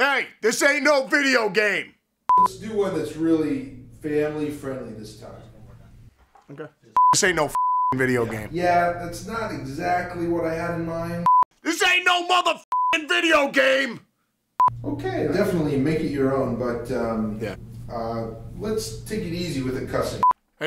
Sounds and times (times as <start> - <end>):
Speech: 0.0 - 5.8, 6.5 - 14.0, 14.9 - 20.6.